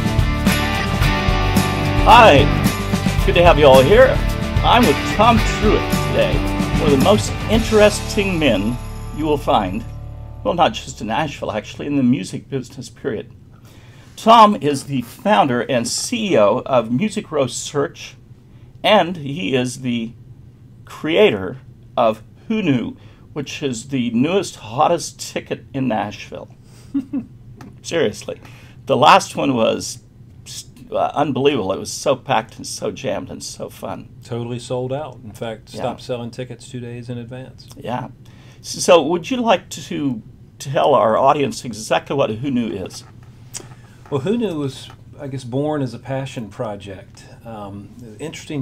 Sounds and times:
Speech: 2.0 - 2.6, 3.2 - 9.8, 10.5 - 13.4, 14.2 - 18.2, 18.8 - 20.2, 20.9 - 26.5, 27.8 - 43.1, 44.1 - 48.6.

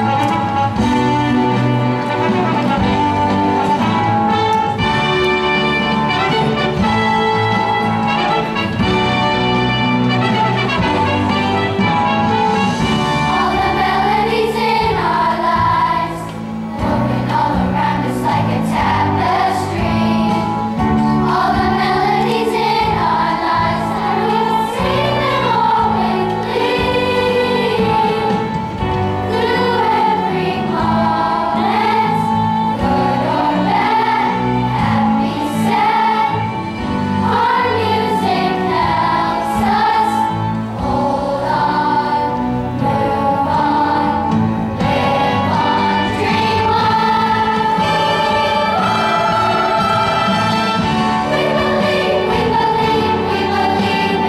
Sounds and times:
Music: 0.0 - 54.2.

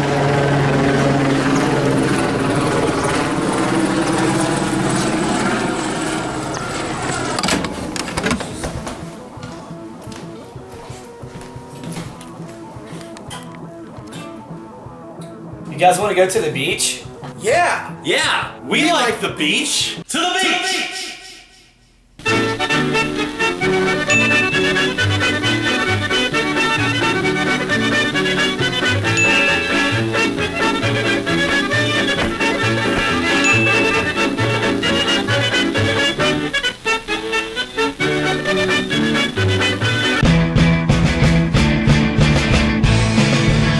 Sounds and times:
Music: 8.5 - 20.1, 22.2 - 43.7
Speech: 15.7 - 21.2.

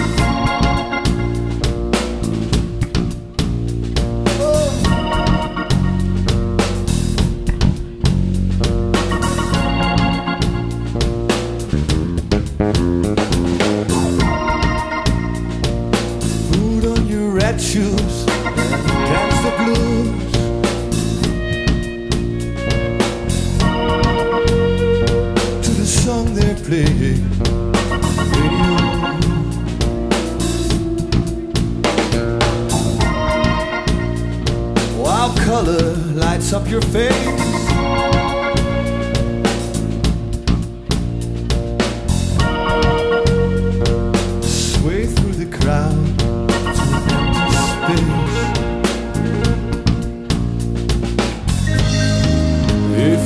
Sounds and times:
Music: 0.0 - 53.2.

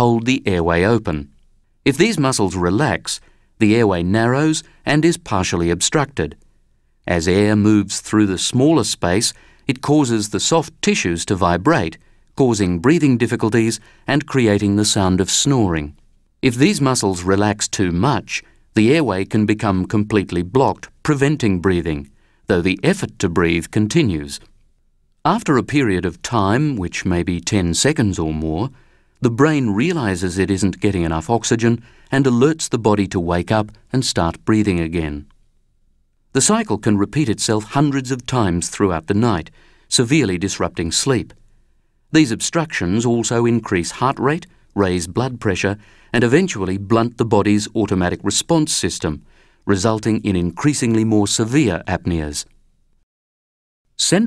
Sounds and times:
Narration, monologue: 0.0 - 53.1, 53.9 - 54.2.

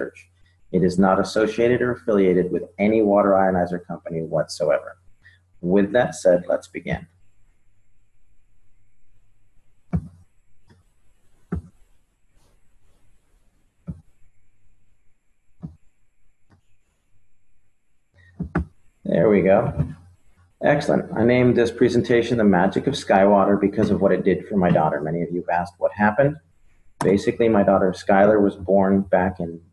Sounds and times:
Speech: 0.0 - 0.2, 0.8 - 5.0, 5.6 - 7.0, 19.1 - 20.0, 20.6 - 26.4, 27.0 - 29.7.

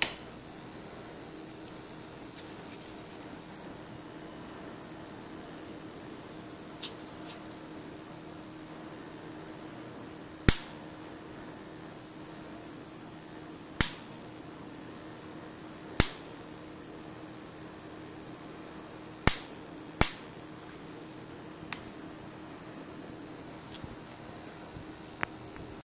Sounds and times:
Hum: 0.0 - 25.8
Mains hum: 0.0 - 25.8.

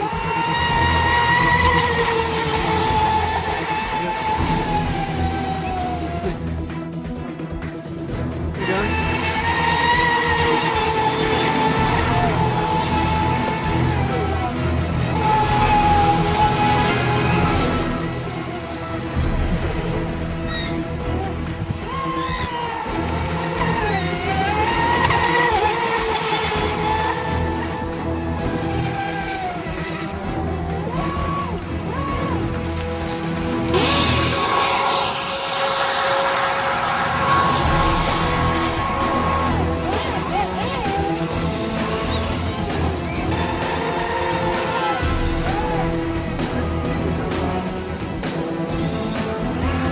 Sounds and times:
Boat, Water vehicle: 0.0 - 49.9
Music: 0.0 - 49.9.

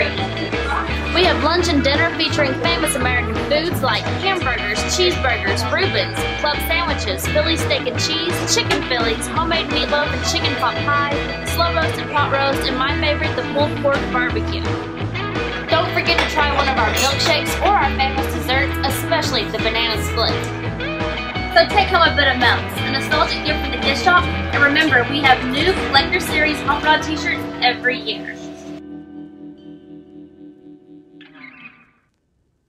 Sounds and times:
Speech: 0.0 - 14.8, 15.7 - 20.5, 21.6 - 28.7
Music: 0.0 - 32.6.

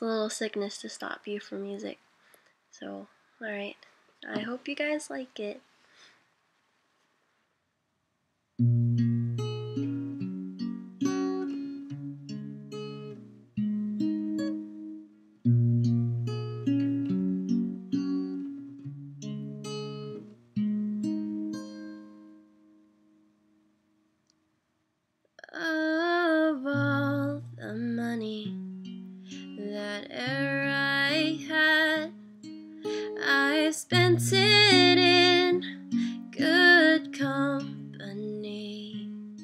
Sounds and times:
Music: 8.6 - 24.0, 26.8 - 39.4.

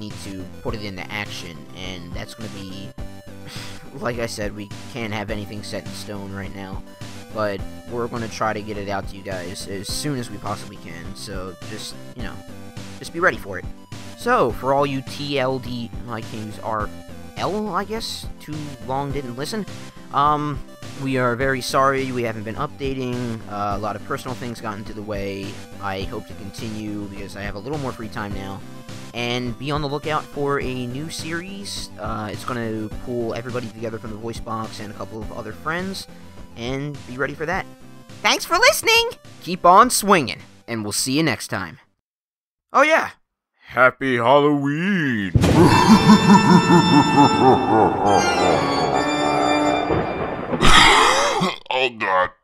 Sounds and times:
Speech: 0.0 - 2.9, 3.9 - 6.8, 7.4 - 12.4, 13.0 - 28.6, 29.2 - 37.6, 38.3 - 41.9, 42.8 - 45.4, 51.5 - 52.4
Music: 0.0 - 42.0, 45.4 - 51.1.

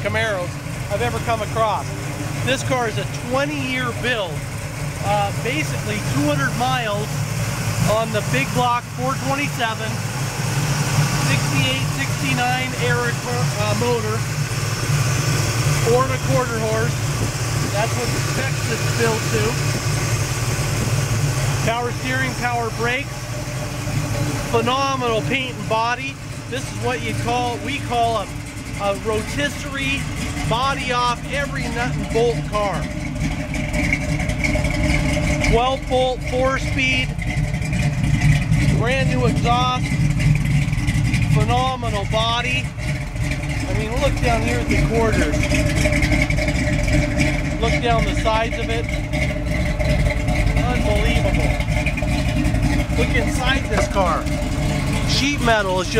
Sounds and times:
Speech: 0.0 - 1.9, 2.5 - 4.4, 5.0 - 7.1, 7.8 - 10.0, 11.2 - 14.2, 15.8 - 17.0, 17.7 - 19.6, 21.6 - 23.1, 24.5 - 32.9, 35.5 - 37.1, 38.6 - 39.9, 41.3 - 42.7, 43.6 - 45.4, 47.6 - 48.9, 50.6 - 51.5, 53.0 - 54.3, 55.1 - 55.9.

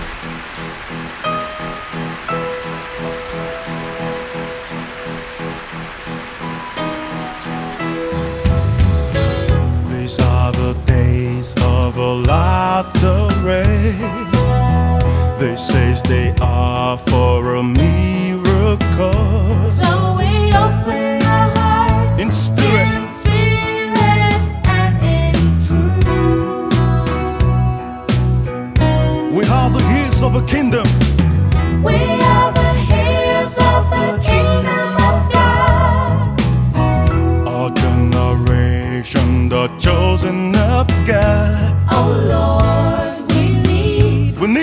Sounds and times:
Music: 0.0 - 44.6
Speech: 22.2 - 23.1, 29.3 - 31.1.

